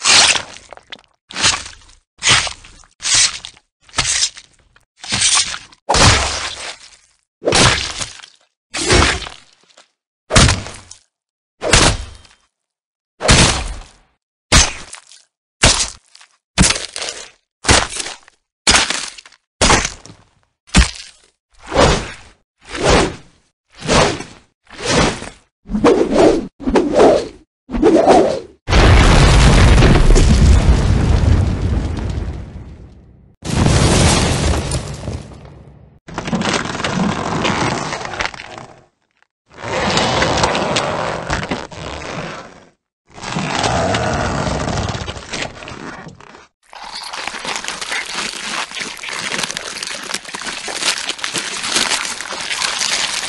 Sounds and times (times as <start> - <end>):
Sound effect: 20.8 - 29.2, 43.1 - 53.2.